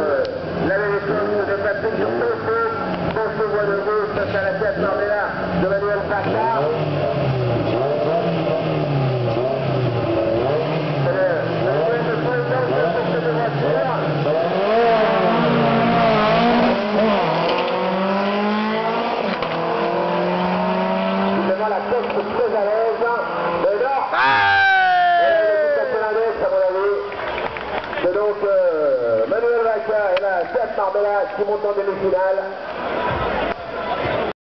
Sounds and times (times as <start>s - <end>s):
Speech: 0.0s - 6.8s, 11.0s - 14.3s, 21.4s - 24.4s, 25.0s - 27.1s, 28.0s - 32.6s.